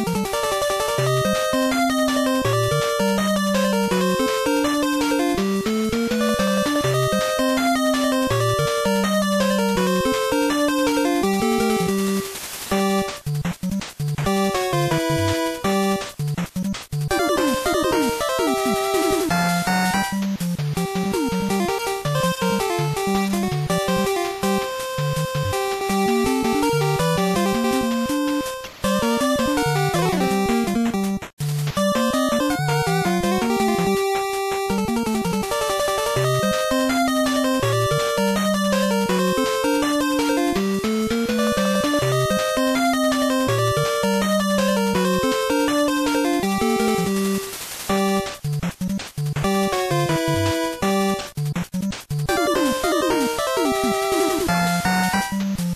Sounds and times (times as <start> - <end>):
Music: 0.0 - 55.7.